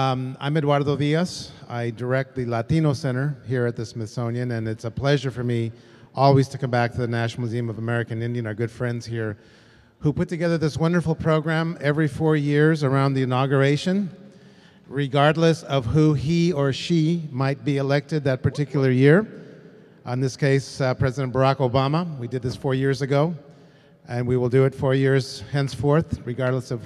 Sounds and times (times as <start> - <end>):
Speech: 0.0 - 9.4, 10.0 - 14.2, 14.9 - 19.4, 20.0 - 23.4, 24.1 - 26.8.